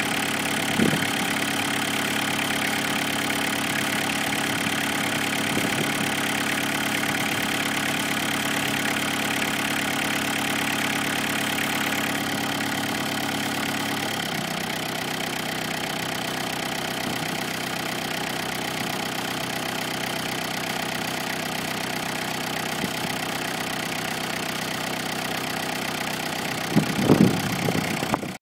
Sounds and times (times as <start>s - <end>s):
Idling: 0.0s - 28.4s
Medium engine (mid frequency): 0.0s - 28.4s
Vehicle: 0.0s - 28.4s.